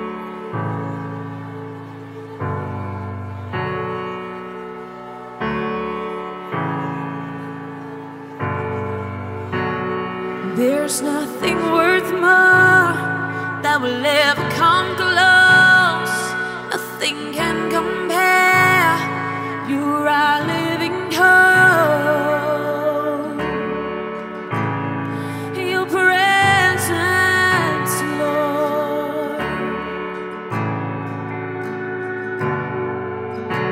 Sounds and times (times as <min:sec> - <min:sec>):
Soul music: 0:00.0 - 0:33.7.